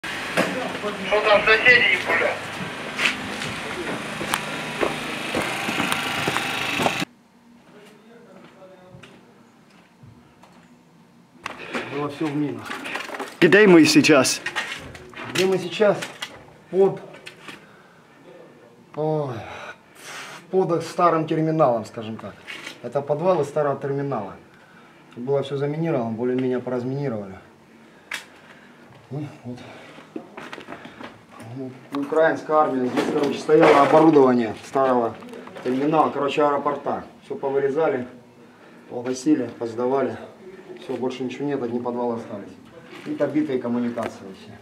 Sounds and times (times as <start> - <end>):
Speech: 0.5 - 2.4, 7.7 - 9.4, 13.4 - 14.5, 31.4 - 38.2, 38.9 - 44.6.